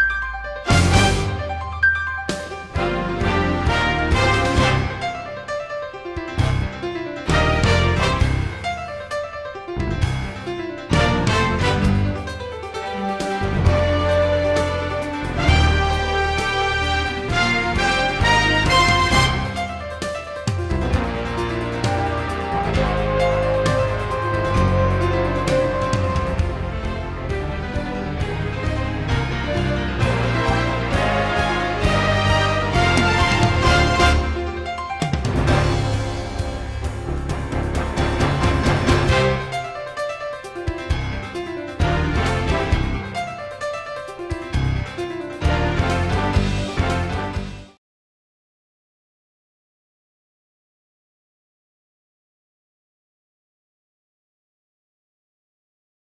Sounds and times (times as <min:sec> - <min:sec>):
Theme music: 0:00.0 - 0:47.8.